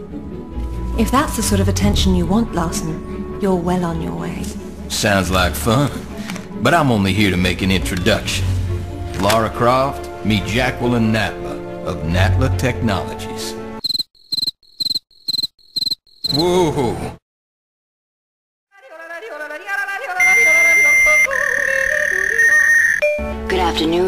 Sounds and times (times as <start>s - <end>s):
Music: 0.0s - 13.8s, 18.7s - 24.0s
Speech: 1.0s - 6.0s, 16.3s - 17.2s, 23.5s - 24.0s.